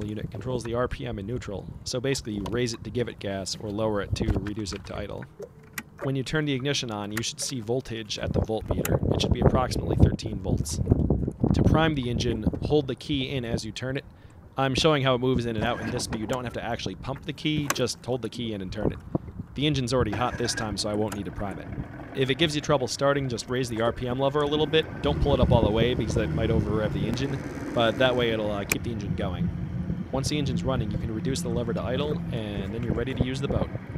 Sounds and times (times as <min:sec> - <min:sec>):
Speech: 0:00.0 - 0:05.3, 0:06.0 - 0:10.8, 0:11.6 - 0:14.0, 0:14.6 - 0:19.0, 0:19.6 - 0:29.4, 0:30.1 - 0:33.7.